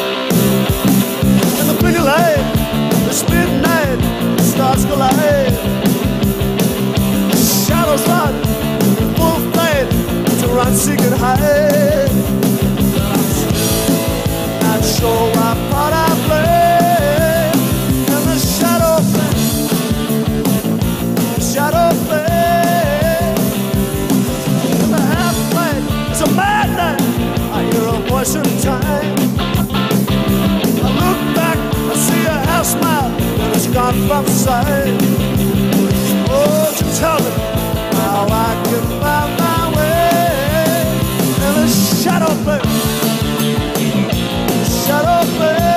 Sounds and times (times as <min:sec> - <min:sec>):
Guitar: 0:00.0 - 0:45.7
Rock music: 0:00.0 - 0:45.7.